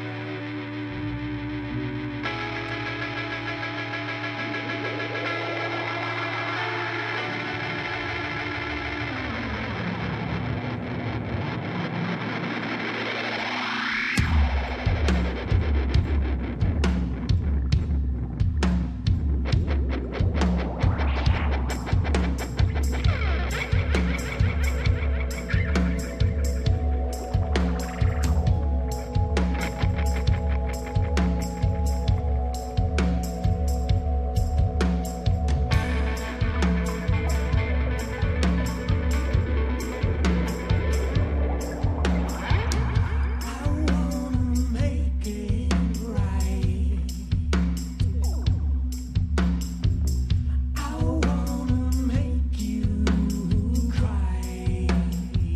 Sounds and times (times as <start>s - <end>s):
Music: 0.0s - 55.5s.